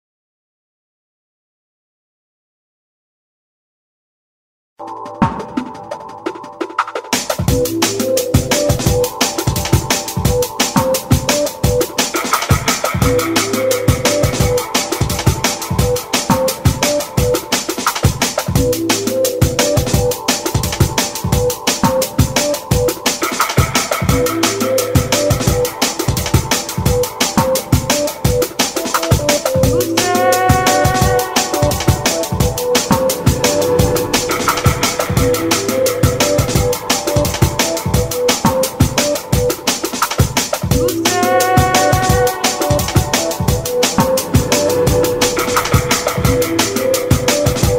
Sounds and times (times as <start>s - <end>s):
Music: 4.8s - 47.7s.